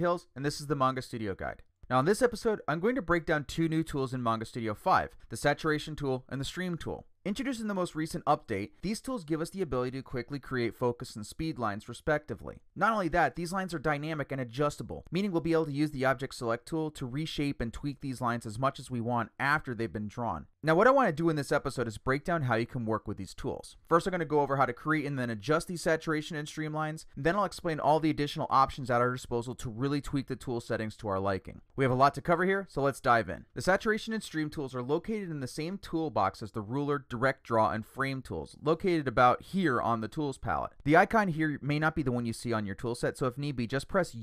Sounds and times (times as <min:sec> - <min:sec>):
Speech: 0:00.0 - 0:44.2.